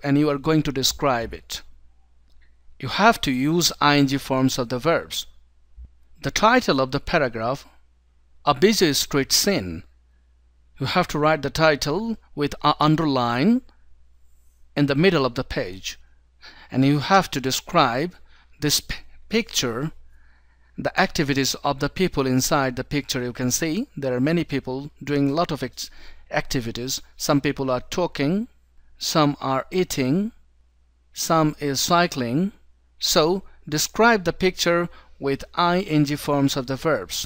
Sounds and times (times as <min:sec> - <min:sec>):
Speech: 0:00.0 - 0:01.7, 0:02.8 - 0:05.3, 0:06.2 - 0:07.7, 0:08.5 - 0:09.9, 0:10.8 - 0:13.7, 0:14.8 - 0:16.0, 0:16.7 - 0:20.0, 0:20.8 - 0:30.4, 0:31.2 - 0:37.2.